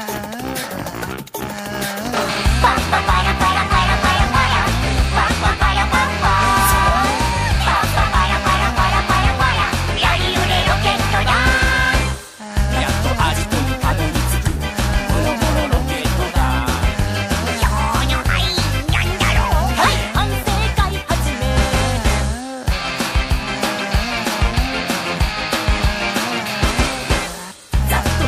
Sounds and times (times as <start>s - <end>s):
Ska: 0.0s - 28.2s.